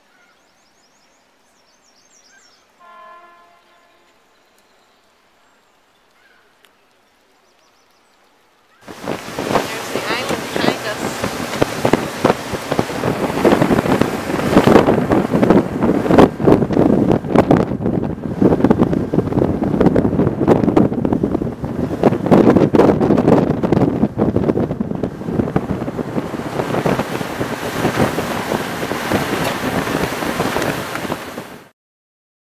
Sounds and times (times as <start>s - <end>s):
Boat, Water vehicle: 0.0s - 31.7s
Wind noise (microphone): 8.8s - 31.7s.